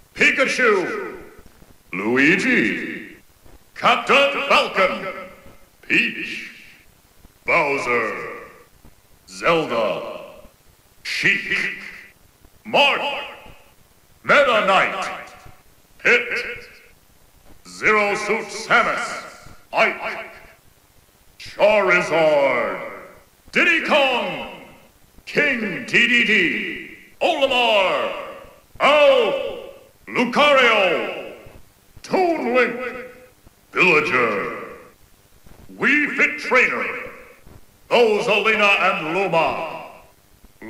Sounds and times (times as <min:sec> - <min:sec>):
Speech: 0:00.2 - 0:03.2, 0:03.8 - 0:06.8, 0:07.5 - 0:08.7, 0:09.3 - 0:10.5, 0:11.1 - 0:16.9, 0:17.6 - 0:20.6, 0:21.4 - 0:35.0, 0:35.7 - 0:40.6.